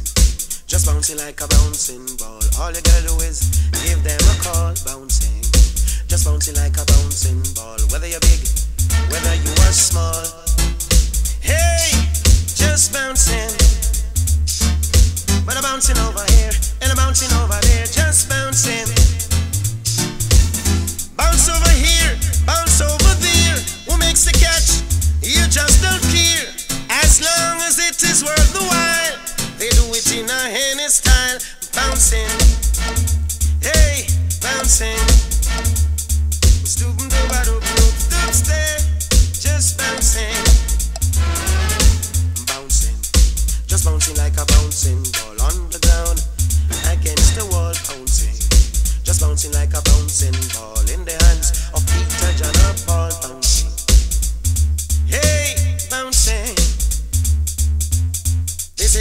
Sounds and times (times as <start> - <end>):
Music: 0.0 - 59.0.